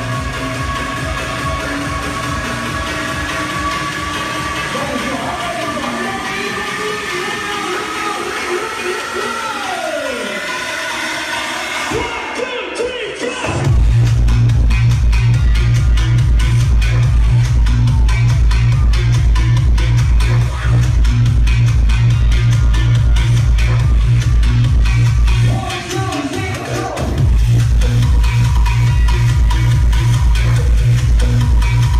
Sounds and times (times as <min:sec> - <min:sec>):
Exciting music: 0:00.0 - 0:31.9
Pop music: 0:00.0 - 0:31.9.